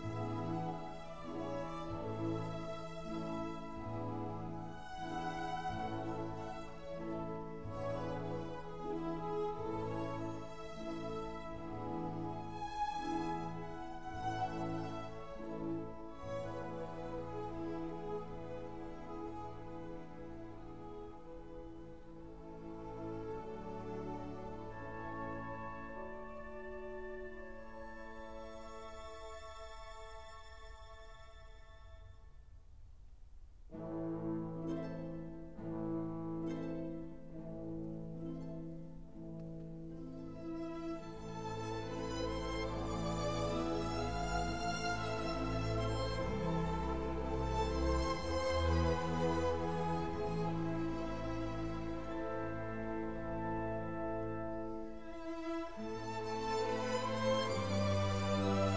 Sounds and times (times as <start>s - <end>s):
Sad music: 0.0s - 31.3s, 33.8s - 58.7s.